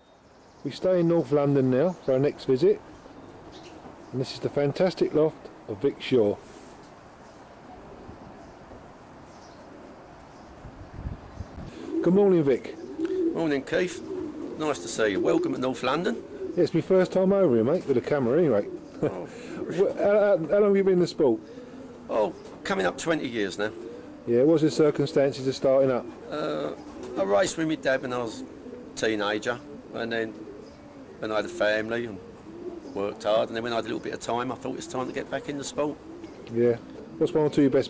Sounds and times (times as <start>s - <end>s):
Speech: 0.6s - 2.8s, 4.2s - 6.4s, 12.0s - 12.8s, 13.4s - 14.0s, 14.6s - 21.4s, 22.1s - 30.4s, 31.2s - 32.2s, 33.0s - 37.8s
Coo: 11.7s - 37.8s.